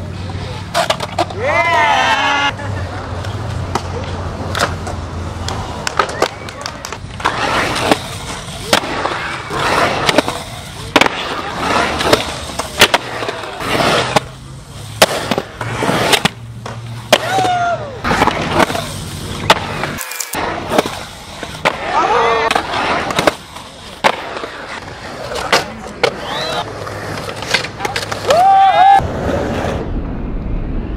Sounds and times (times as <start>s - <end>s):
Skateboard: 0.0s - 30.0s.